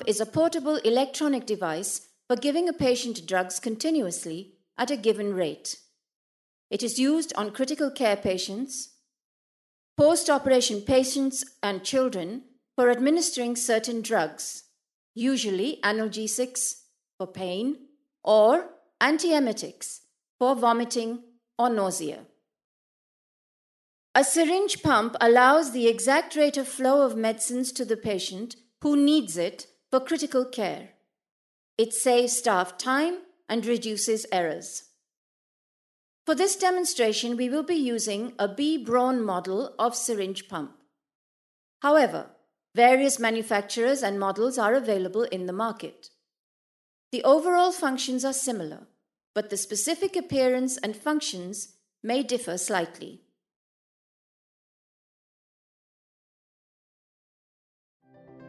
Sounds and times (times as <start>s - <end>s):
Speech: 0.0s - 5.8s, 6.7s - 8.9s, 10.0s - 14.6s, 15.2s - 22.3s, 24.2s - 30.9s, 31.8s - 34.8s, 36.3s - 40.8s, 41.8s - 46.1s, 47.2s - 53.2s.